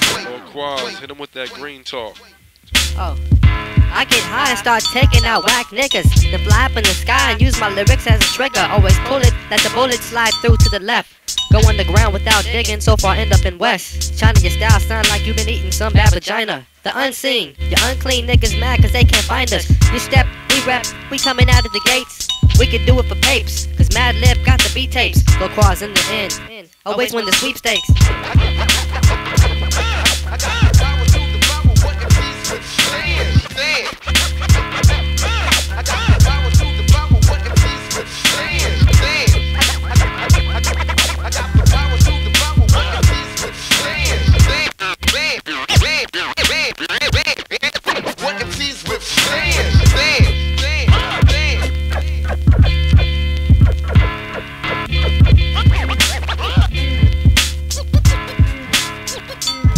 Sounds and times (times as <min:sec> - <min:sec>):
Music: 0:00.0 - 0:16.3, 0:17.4 - 0:59.7.